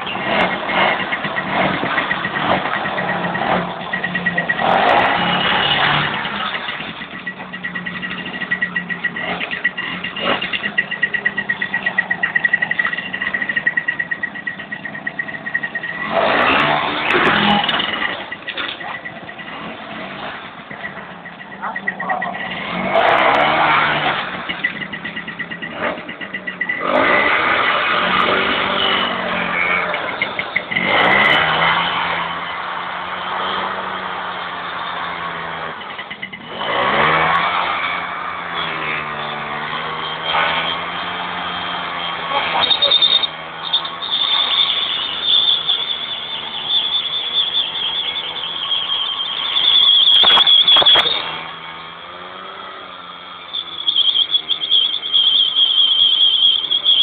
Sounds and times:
Motorcycle: 0.0 - 57.0
Squeal: 0.0 - 57.0.

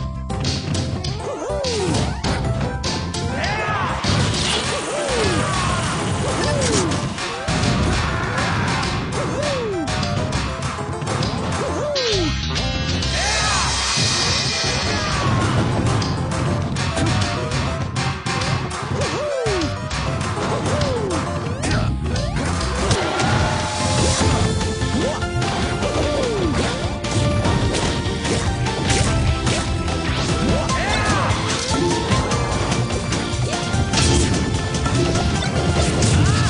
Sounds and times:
Music: 0.0 - 36.5.

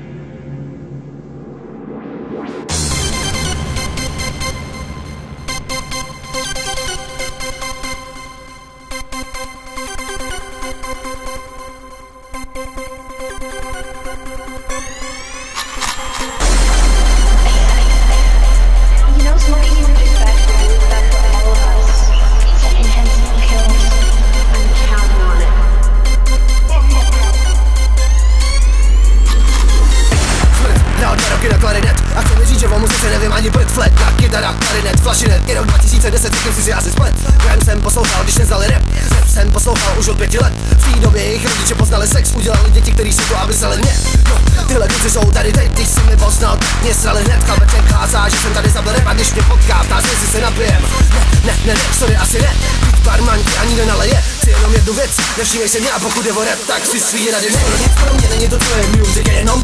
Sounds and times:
Music: 0.0 - 59.6.

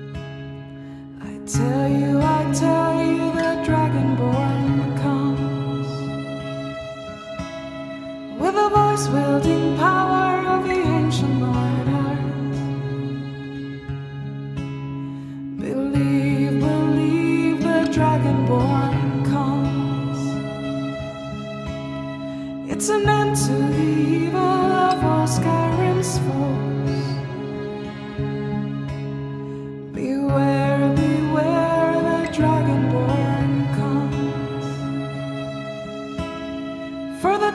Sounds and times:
Music: 0.0 - 37.5.

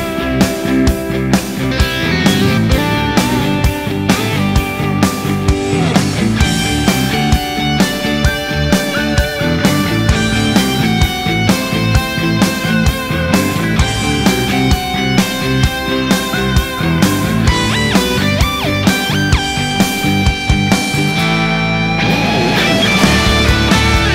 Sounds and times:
Drum: 0.0 - 21.4, 22.0 - 24.1
Drum kit: 0.0 - 24.1.

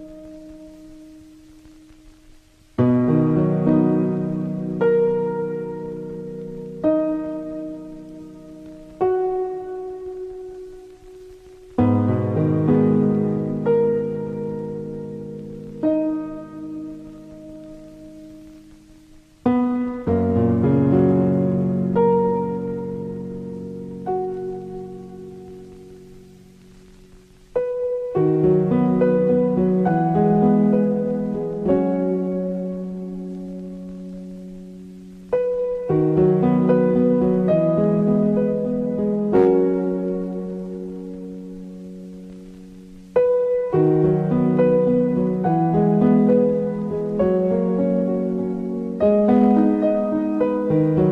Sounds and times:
Music: 0.0 - 51.1.

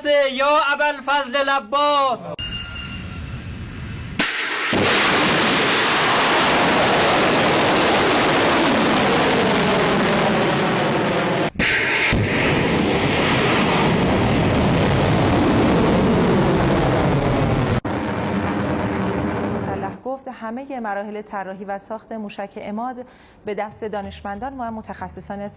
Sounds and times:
Outside, rural or natural: 2.3 - 19.8.

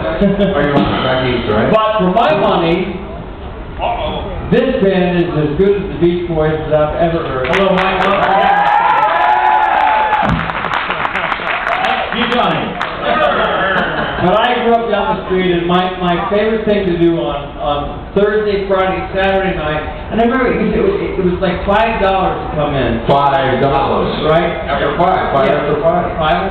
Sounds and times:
Speech: 3.8 - 8.3, 14.2 - 26.5.

